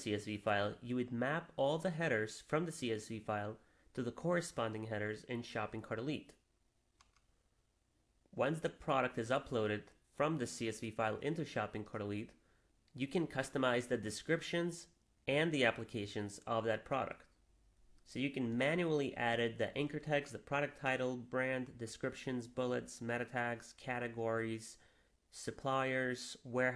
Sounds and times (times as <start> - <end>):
Speech: 0.0 - 6.4, 8.4 - 17.3, 18.0 - 26.7.